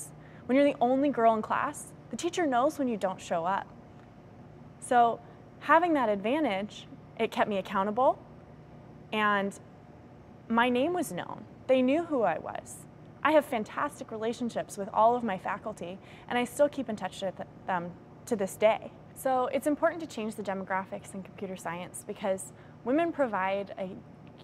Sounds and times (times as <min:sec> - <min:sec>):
Female speech, woman speaking: 0:00.0 - 0:03.7, 0:04.8 - 0:08.2, 0:09.2 - 0:09.6, 0:10.5 - 0:24.0.